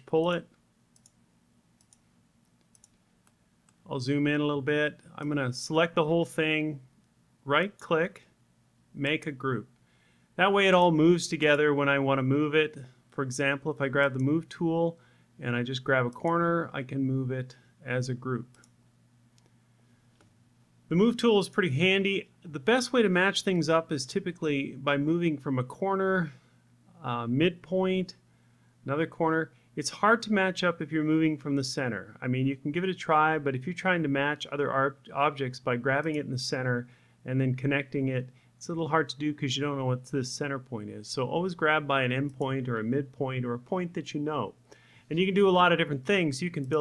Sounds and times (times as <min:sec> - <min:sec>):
Speech: 0:00.0 - 0:00.6, 0:03.8 - 0:08.3, 0:09.0 - 0:09.7, 0:10.4 - 0:18.6, 0:20.9 - 0:28.2, 0:28.8 - 0:46.8.